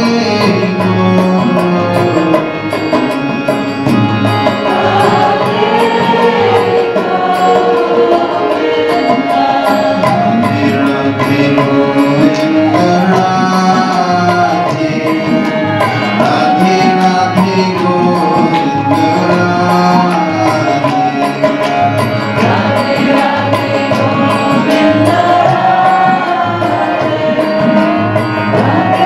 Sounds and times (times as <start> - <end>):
Folk music: 0.0 - 29.0.